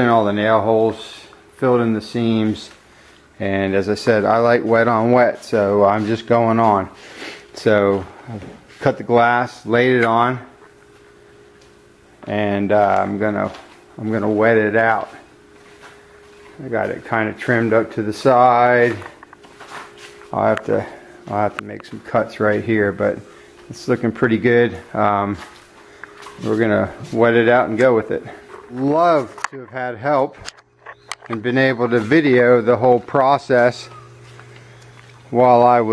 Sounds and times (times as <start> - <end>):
Speech: 0.0 - 2.8, 3.4 - 7.0, 7.6 - 10.5, 12.2 - 15.2, 16.6 - 19.1, 20.3 - 25.5, 26.4 - 30.5, 31.3 - 34.0, 35.3 - 35.9.